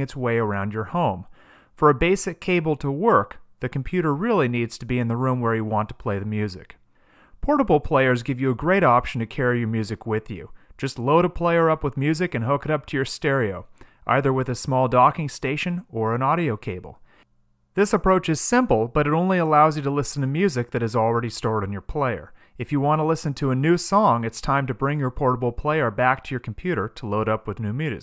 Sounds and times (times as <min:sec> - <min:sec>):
Speech: 0:00.0 - 0:06.8, 0:07.4 - 0:17.0, 0:17.8 - 0:28.0.